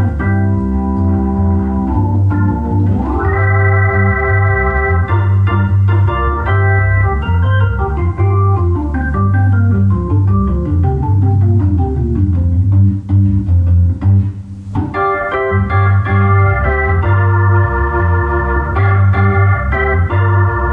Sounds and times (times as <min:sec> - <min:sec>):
Electronic organ: 0:00.0 - 0:20.7.